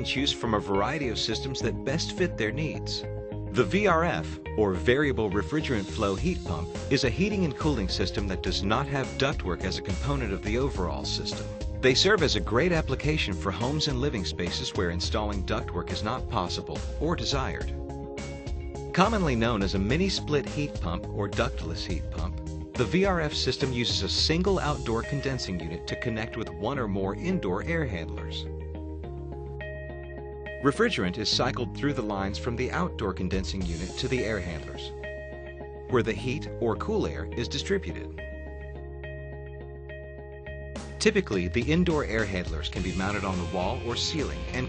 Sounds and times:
Speech: 0:00.0 - 0:17.7, 0:19.0 - 0:28.5, 0:30.6 - 0:34.9, 0:35.9 - 0:38.1, 0:41.0 - 0:44.6
Music: 0:00.0 - 0:44.6.

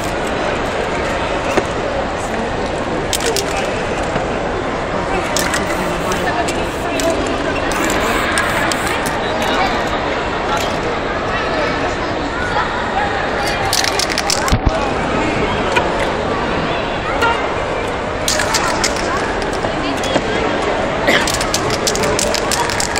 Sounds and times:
Speech: 0:00.0 - 0:22.9
Spray: 0:05.4 - 0:09.2.

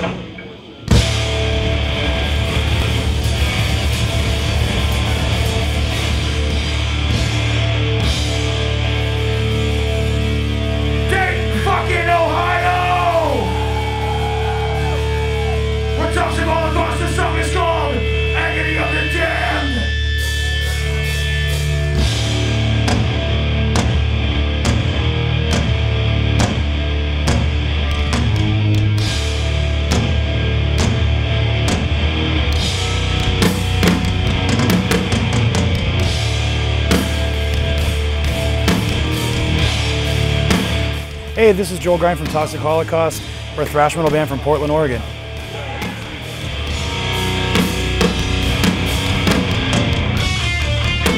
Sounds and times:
Music: 0:00.0 - 0:51.1.

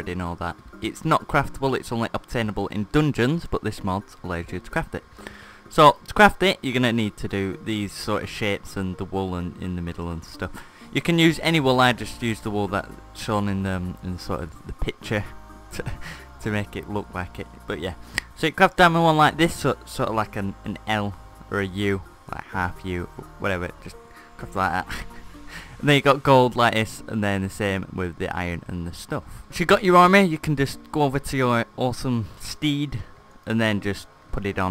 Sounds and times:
Speech: 0:00.0 - 0:05.0, 0:05.7 - 0:25.0, 0:25.8 - 0:34.7
Music: 0:00.0 - 0:34.7.

